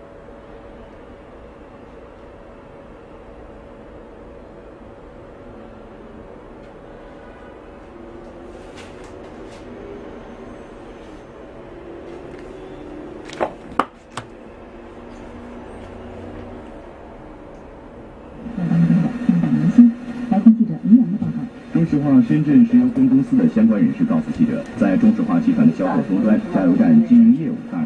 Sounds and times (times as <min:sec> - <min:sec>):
Speech: 0:18.6 - 0:27.8.